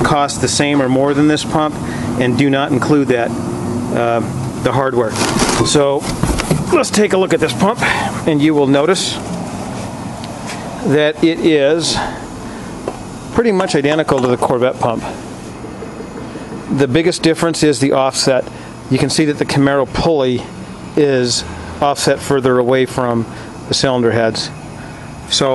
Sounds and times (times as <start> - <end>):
Speech: 0.0 - 3.3, 3.9 - 6.1, 6.7 - 9.2, 10.8 - 12.2, 13.3 - 15.2, 16.7 - 24.6, 25.3 - 25.5
Medium engine (mid frequency): 0.0 - 25.5.